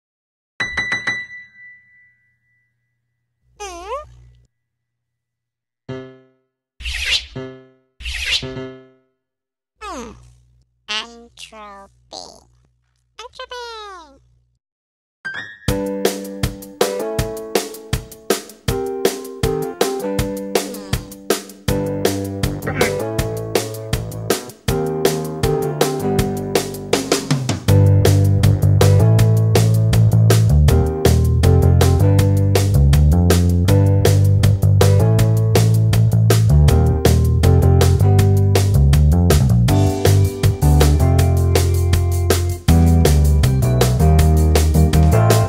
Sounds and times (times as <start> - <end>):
Ding-dong: 0.6 - 3.1.